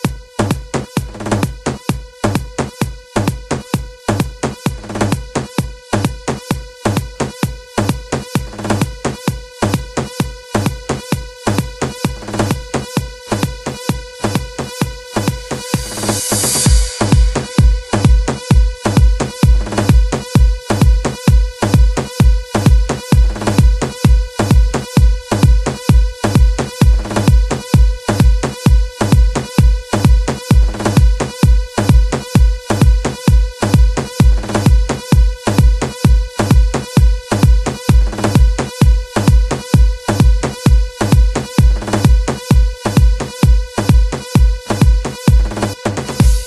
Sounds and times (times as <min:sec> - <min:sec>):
Electronica: 0:00.0 - 0:46.4.